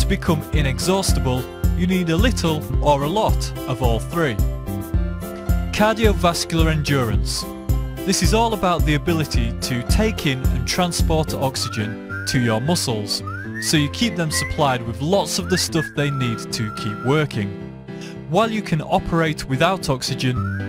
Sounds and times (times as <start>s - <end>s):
Speech: 0.0s - 4.4s, 5.8s - 7.5s, 8.1s - 17.6s, 18.3s - 20.5s
Music: 0.0s - 20.6s.